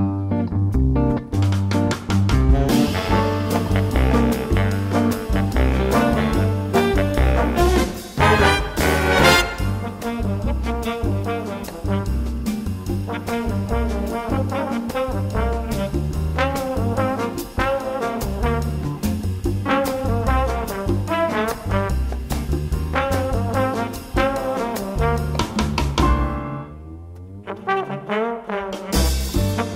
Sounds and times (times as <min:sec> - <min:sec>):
Music: 0:00.0 - 0:29.7.